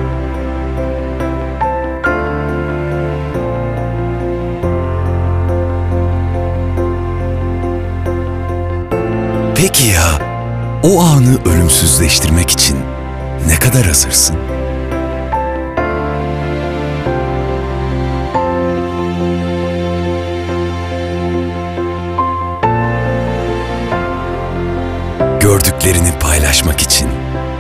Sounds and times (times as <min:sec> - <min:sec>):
Music: 0:00.0 - 0:27.6
Speech: 0:09.6 - 0:10.2, 0:10.8 - 0:14.4, 0:25.4 - 0:27.2.